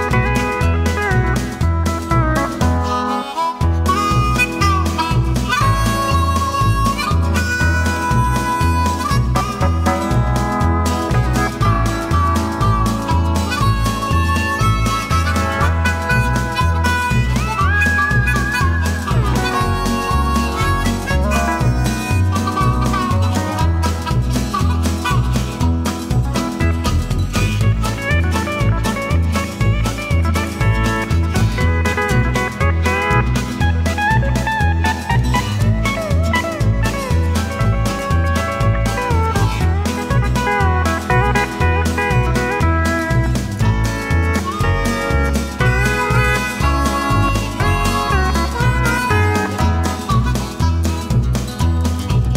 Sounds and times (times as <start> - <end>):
Music: 0.0 - 52.3.